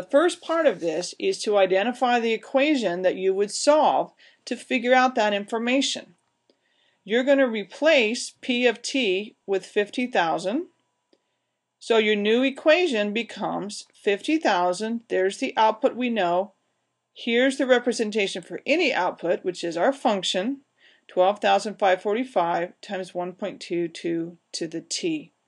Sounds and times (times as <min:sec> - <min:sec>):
Speech: 0:00.0 - 0:06.2, 0:07.1 - 0:10.8, 0:11.8 - 0:16.6, 0:17.2 - 0:25.4.